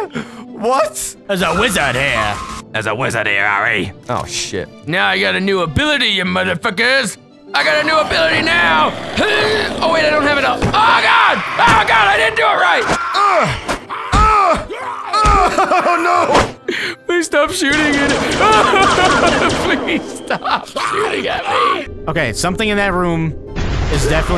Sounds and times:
Music: 0.0s - 24.3s
Groan: 12.9s - 15.5s.

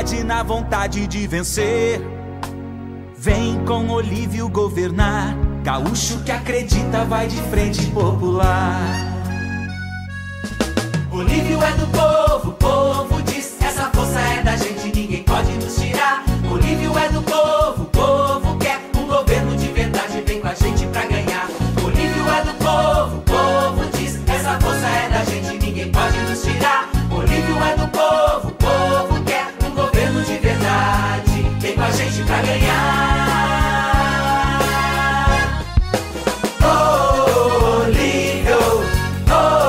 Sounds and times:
Jingle (music): 0.0s - 39.6s.

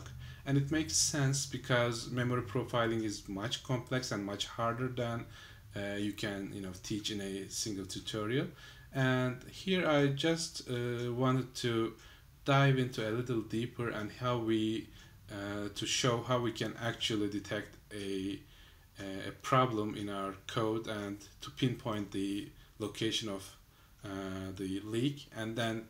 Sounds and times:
Speech: 0.0s - 25.8s.

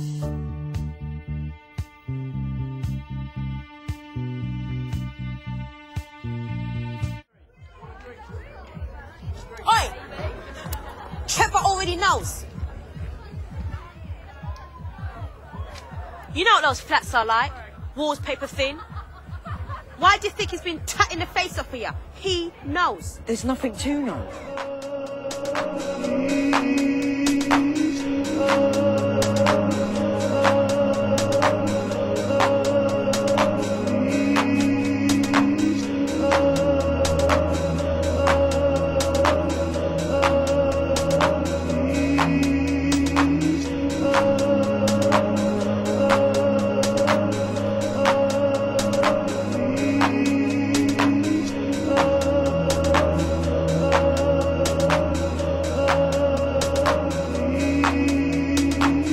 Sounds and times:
Music: 0.0s - 59.1s.

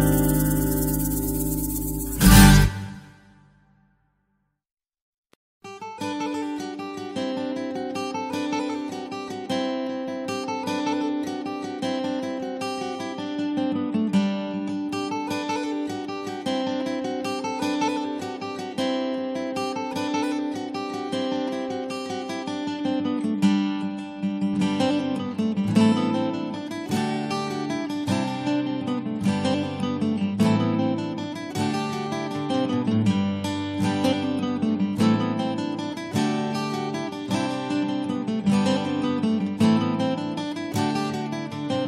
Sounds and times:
Acoustic guitar: 0.0s - 3.5s, 5.6s - 41.8s.

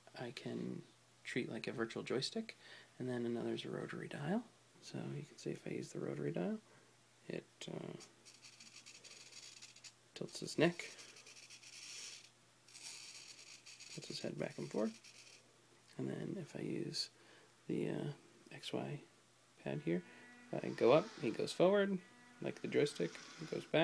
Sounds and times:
Inside, small room: 0.0s - 23.8s
Speech: 0.2s - 6.6s, 10.2s - 10.9s, 14.0s - 15.0s, 16.0s - 17.1s, 17.7s - 20.0s, 20.6s - 23.8s.

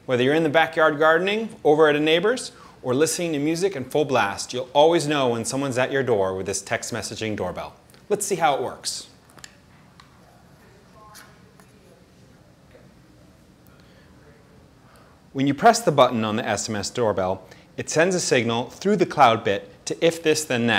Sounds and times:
Speech: 0.1s - 9.2s, 10.0s - 13.5s, 15.4s - 20.7s.

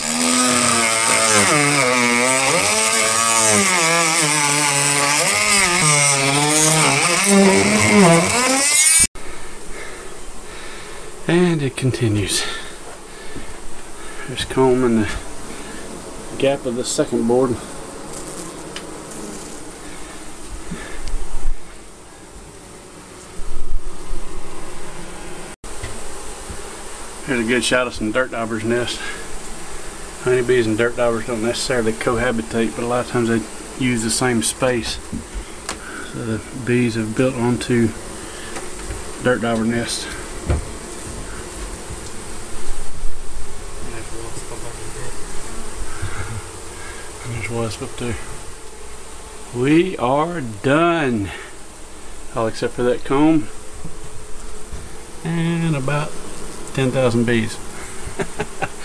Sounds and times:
Bee, wasp, etc.: 0.0s - 58.8s
Fly, housefly: 0.0s - 58.8s.

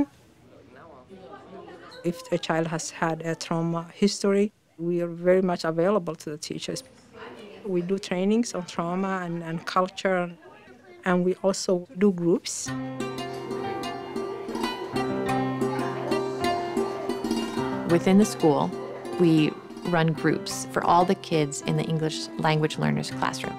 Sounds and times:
Speech: 0.0s - 12.7s, 17.9s - 23.5s
Mandolin: 12.8s - 23.5s.

